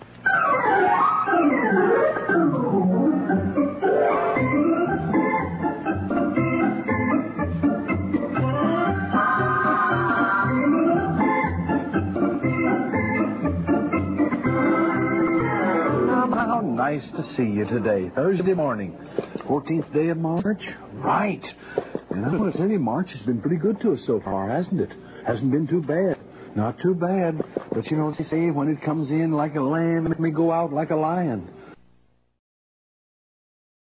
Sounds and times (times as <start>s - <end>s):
Speech: 16.1s - 31.6s.